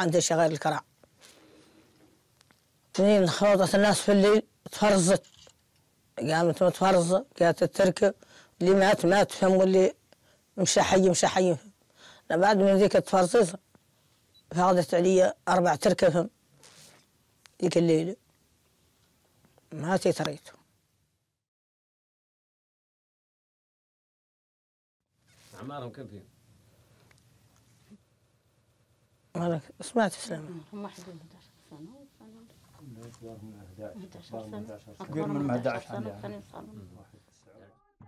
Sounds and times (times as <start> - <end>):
Inside, small room: 25.0 - 38.0.